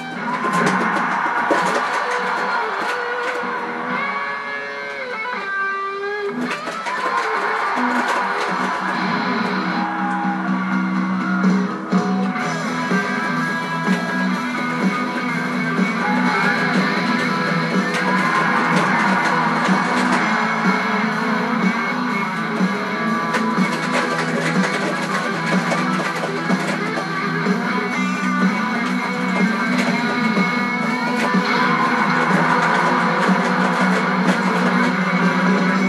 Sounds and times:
Acoustic guitar: 11.2s - 35.8s.

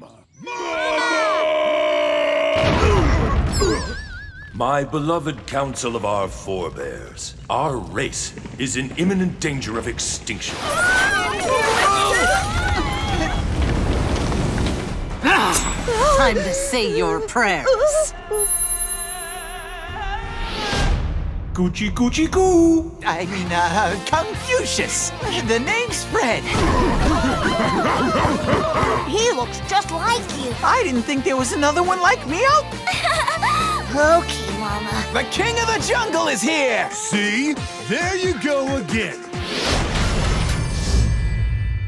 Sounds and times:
Music: 15.1s - 41.8s.

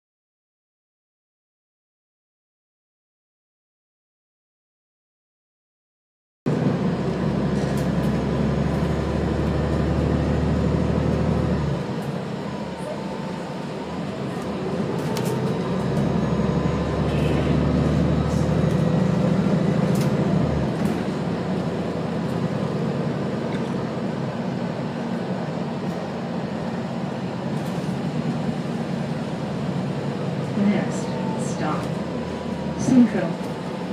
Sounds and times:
Bus: 6.5s - 33.9s.

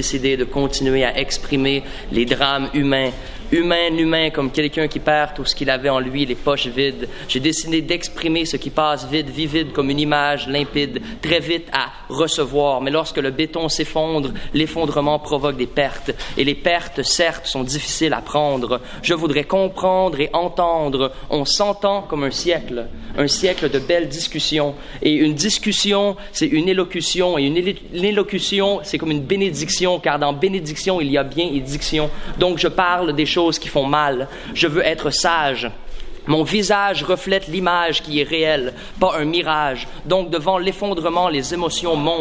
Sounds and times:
Speech: 0.0s - 42.2s.

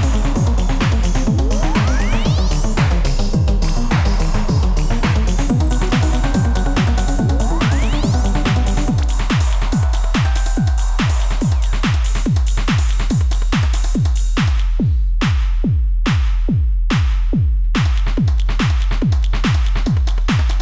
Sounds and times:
Drum machine: 0.0s - 20.6s
Sampler: 5.5s - 12.7s.

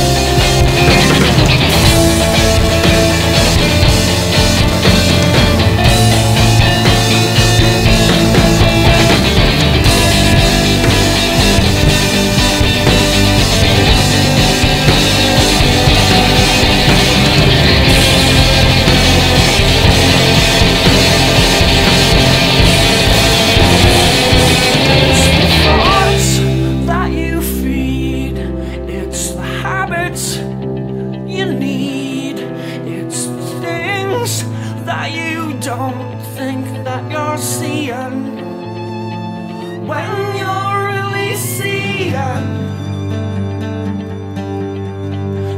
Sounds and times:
Psychedelic rock: 0.0s - 45.5s.

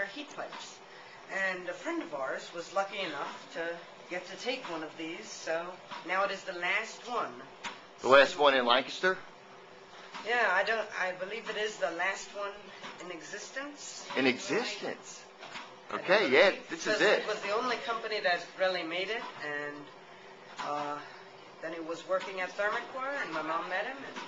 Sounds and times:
Conversation: 0.0s - 24.2s.

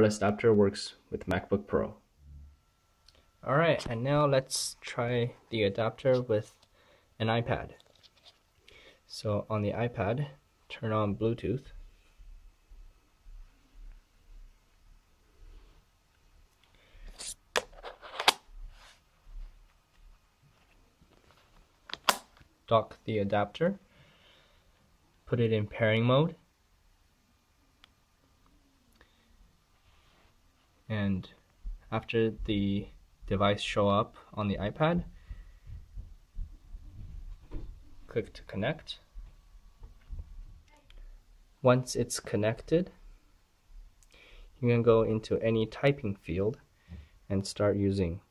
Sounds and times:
Inside, small room: 0.0s - 48.3s.

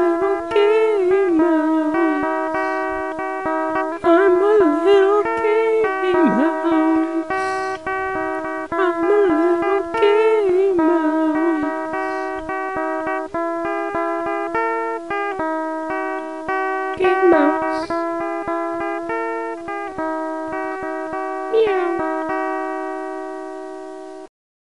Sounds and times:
Music: 0.0s - 24.3s
Speech: 8.8s - 10.7s, 17.0s - 18.0s, 21.5s - 22.1s.

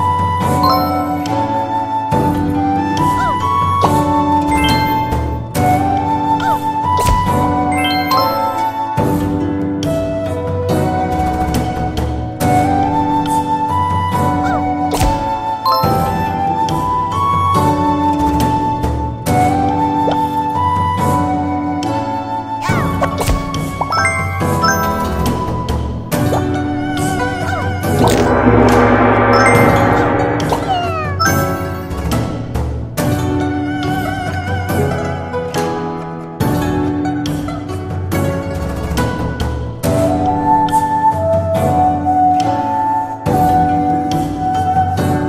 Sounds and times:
Wedding music: 0.6s - 2.0s, 4.6s - 5.6s, 6.6s - 9.0s, 14.5s - 16.7s, 23.9s - 25.7s, 27.6s - 32.1s.

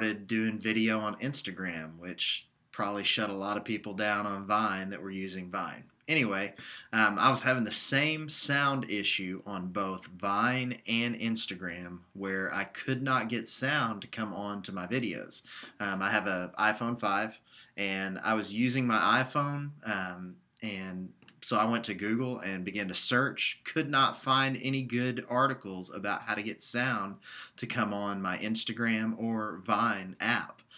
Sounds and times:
Speech: 0.0s - 30.6s.

